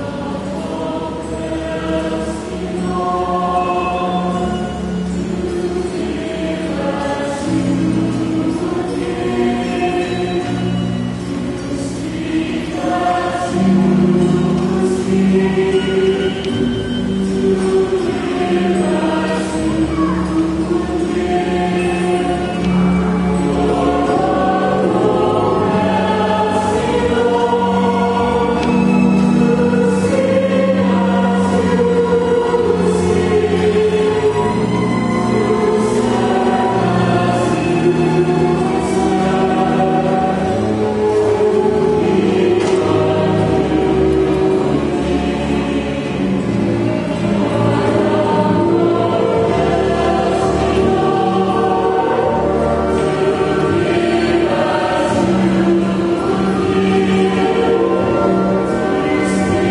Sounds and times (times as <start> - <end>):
Choir: 0.0 - 59.7.